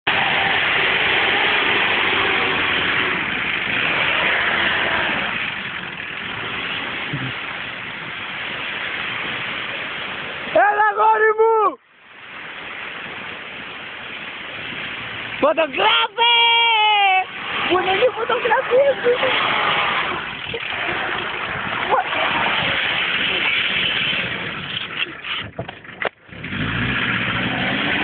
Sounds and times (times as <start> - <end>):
Car: 0.0 - 28.0.